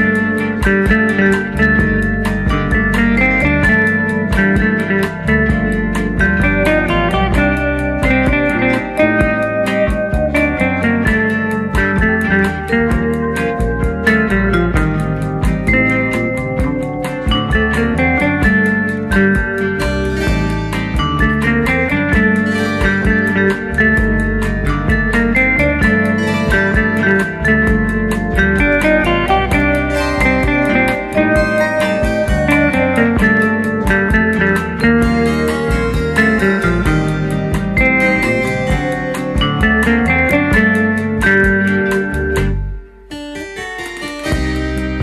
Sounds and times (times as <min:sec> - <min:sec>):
Music: 0:00.0 - 0:45.0.